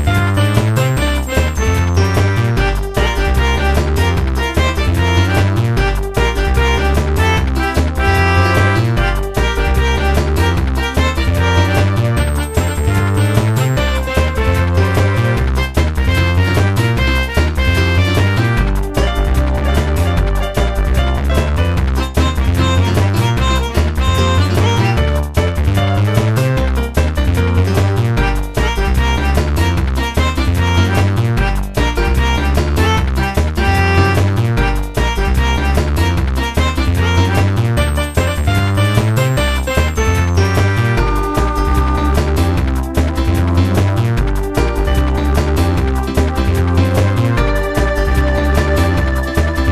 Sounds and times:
Music: 0:00.0 - 0:49.7.

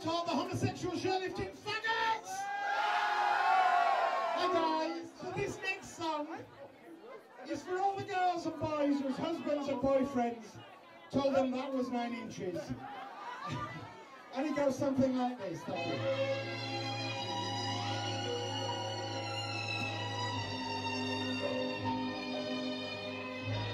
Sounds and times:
Speech: 0:00.0 - 0:02.5, 0:04.4 - 0:12.8, 0:14.3 - 0:16.0.

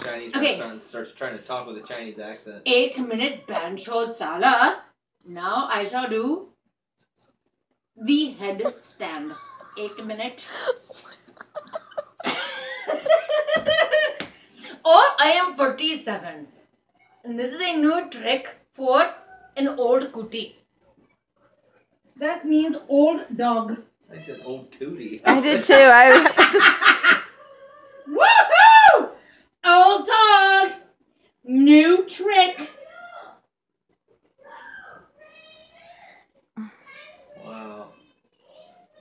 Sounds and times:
Inside, small room: 0:00.0 - 0:39.0
Speech: 0:25.1 - 0:26.3.

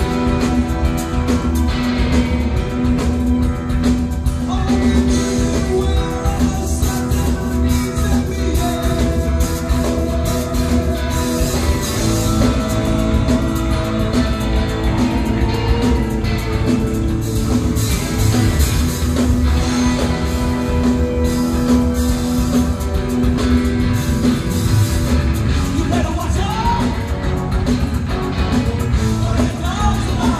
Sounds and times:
Music: 0:00.0 - 0:30.4.

